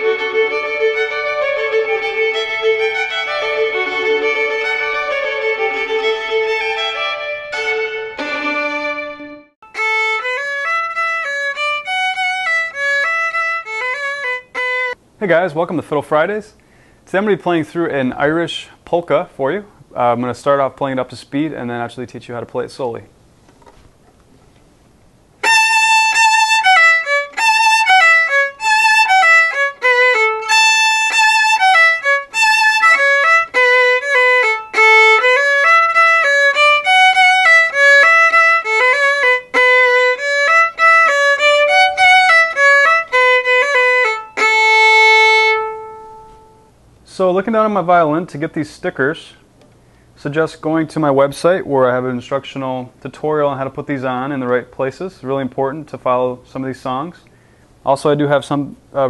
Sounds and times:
Violin, fiddle: 0.0 - 15.0, 25.4 - 46.7.

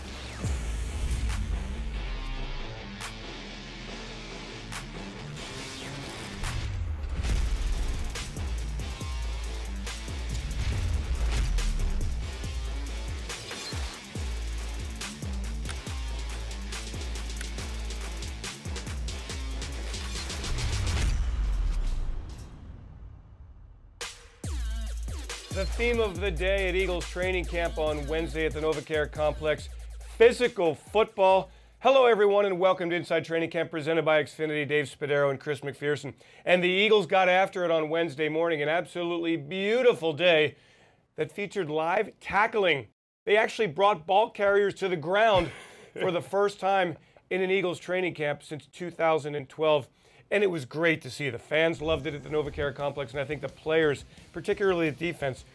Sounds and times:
Music: 0.0 - 31.9, 51.7 - 55.5
Speech: 25.6 - 40.6, 41.2 - 55.5.

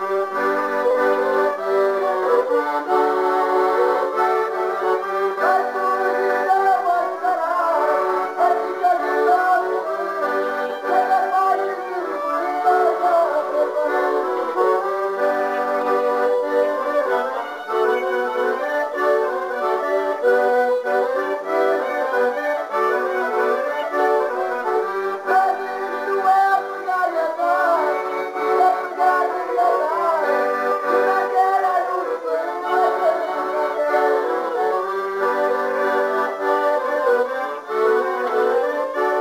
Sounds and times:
Accordion: 0.0 - 39.2.

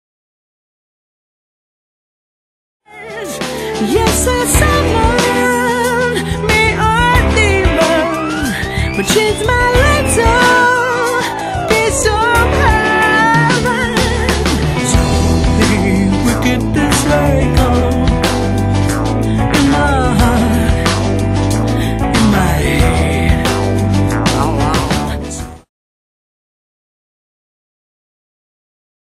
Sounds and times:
Music: 2.8 - 25.7.

